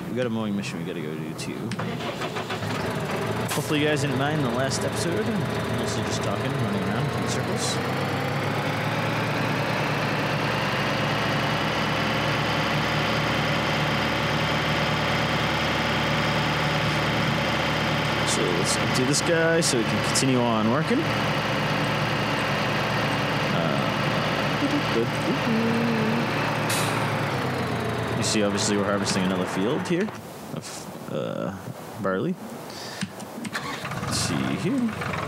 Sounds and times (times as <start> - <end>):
Speech: 0.0 - 1.8, 3.5 - 7.8, 18.2 - 21.1, 23.5 - 24.0, 24.6 - 26.2, 28.2 - 32.4, 34.1 - 35.0.